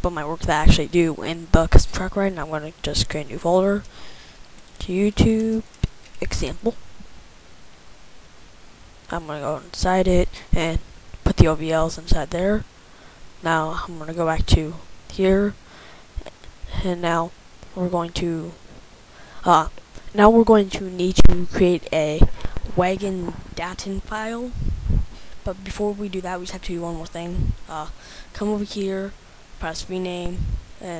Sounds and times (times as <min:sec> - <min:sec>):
Speech: 0:00.0 - 0:03.9, 0:04.8 - 0:06.8, 0:09.1 - 0:12.7, 0:13.4 - 0:15.6, 0:16.7 - 0:18.6, 0:19.4 - 0:24.6, 0:25.4 - 0:30.9.